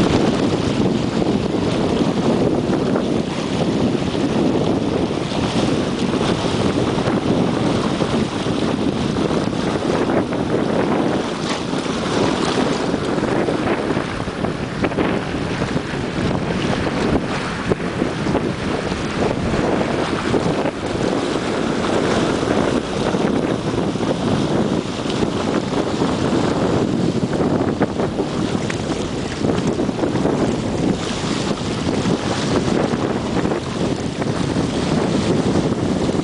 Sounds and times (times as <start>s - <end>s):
Rowboat, canoe, kayak: 0.0s - 36.2s
Sailboat, sailing ship: 0.0s - 36.2s.